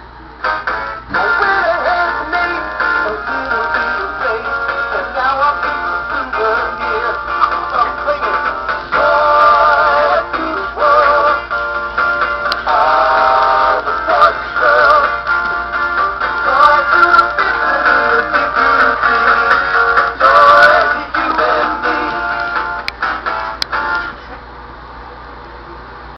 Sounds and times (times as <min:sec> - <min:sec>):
Music: 0:00.4 - 0:24.2
Synthetic singing: 0:01.1 - 0:11.5, 0:12.6 - 0:15.2, 0:16.4 - 0:19.5, 0:20.2 - 0:22.4.